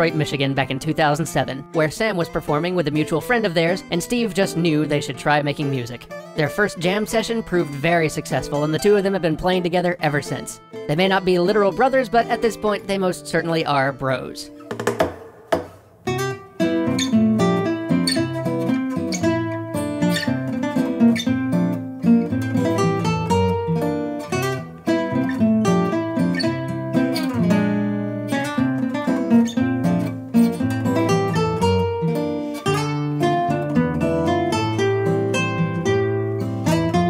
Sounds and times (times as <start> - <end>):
Speech: 0.0 - 14.5
Acoustic guitar: 0.0 - 37.1.